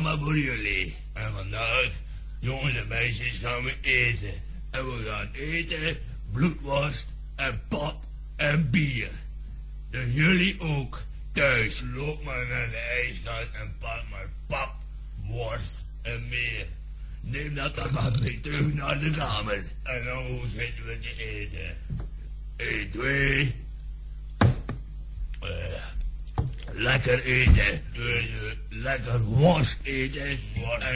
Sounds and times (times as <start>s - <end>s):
Speech: 0.0s - 9.3s, 9.9s - 22.0s, 22.6s - 23.7s, 25.4s - 26.0s, 26.7s - 30.9s.